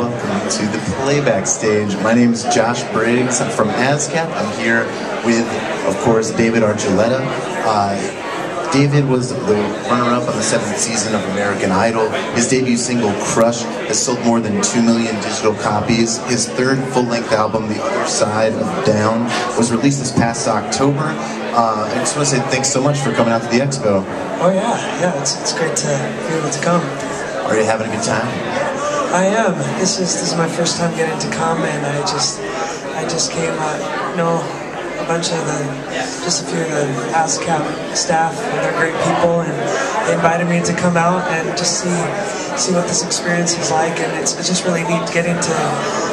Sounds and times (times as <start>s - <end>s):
Speech: 0.0s - 46.1s.